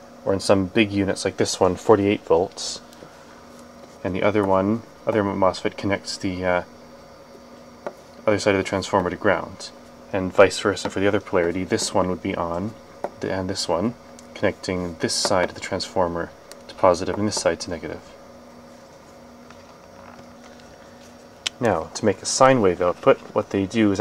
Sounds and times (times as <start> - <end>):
Speech: 0.2 - 2.9, 4.0 - 6.7, 8.2 - 18.2, 21.5 - 24.0.